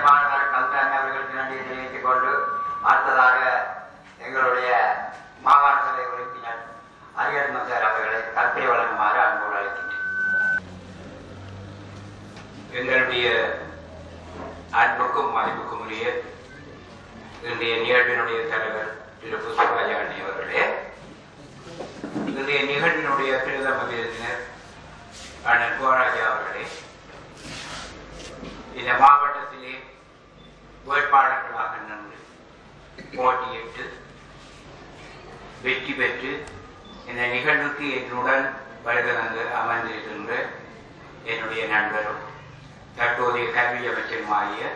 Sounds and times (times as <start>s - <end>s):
Male speech, man speaking: 0.0s - 10.2s, 12.7s - 13.8s, 14.8s - 16.4s, 17.4s - 21.0s, 22.3s - 24.6s, 25.4s - 26.8s, 28.8s - 30.0s, 30.9s - 32.3s, 33.0s - 34.1s, 35.6s - 40.6s, 41.2s - 42.4s, 43.0s - 44.7s
Narration, monologue: 0.0s - 10.7s, 12.6s - 14.0s, 14.6s - 16.6s, 17.3s - 21.4s, 22.0s - 27.2s, 28.2s - 34.6s, 35.5s - 44.7s.